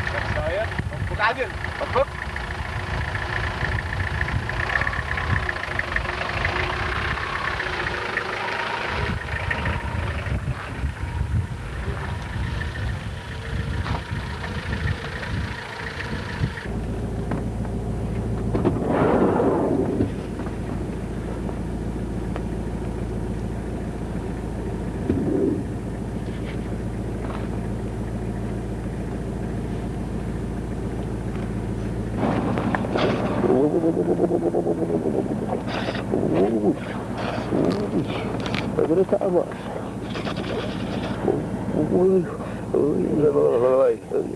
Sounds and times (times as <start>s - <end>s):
Outside, rural or natural: 0.0s - 44.3s.